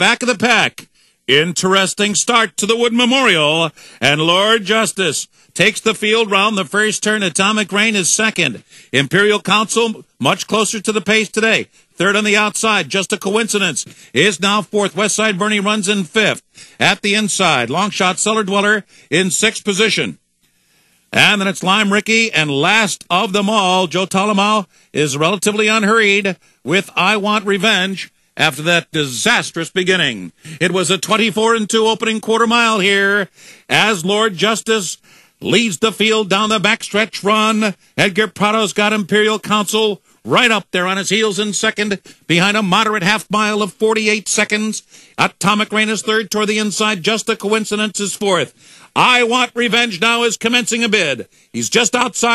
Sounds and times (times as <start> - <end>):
Speech: 0.0 - 20.2, 21.1 - 52.3.